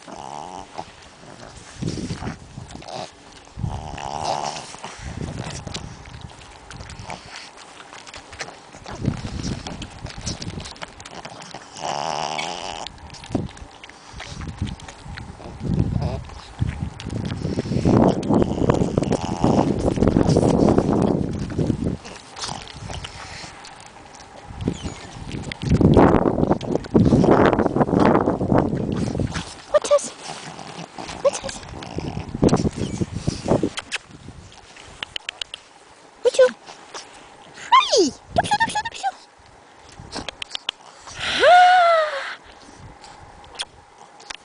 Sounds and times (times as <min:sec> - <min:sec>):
Speech: 0:29.7 - 0:30.2, 0:36.2 - 0:36.6, 0:37.7 - 0:39.2.